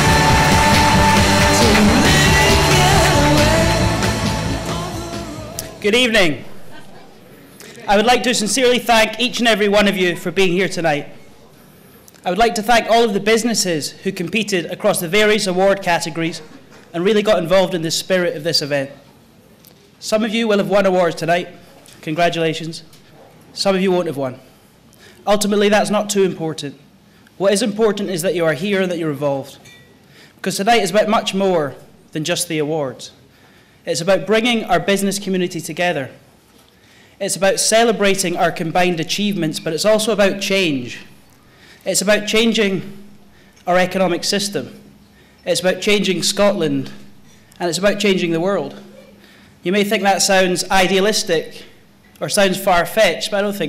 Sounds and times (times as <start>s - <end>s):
Narration, monologue: 5.6s - 6.8s, 7.4s - 53.6s
Male speech, man speaking: 5.8s - 6.5s, 7.7s - 11.4s, 12.2s - 19.0s, 20.0s - 22.9s, 23.6s - 24.4s, 25.2s - 26.8s, 27.4s - 29.6s, 30.4s - 33.2s, 33.9s - 36.2s, 37.2s - 41.1s, 41.9s - 43.0s, 43.7s - 44.8s, 45.5s - 47.0s, 47.6s - 48.9s, 49.6s - 53.6s.